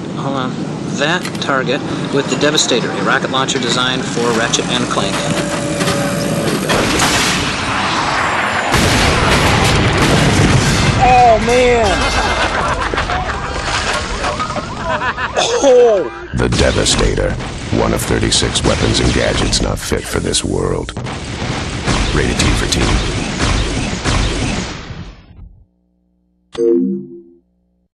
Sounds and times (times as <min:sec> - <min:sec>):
Speech: 0:00.2 - 0:05.4, 0:11.0 - 0:12.0, 0:15.7 - 0:21.0, 0:22.2 - 0:23.0.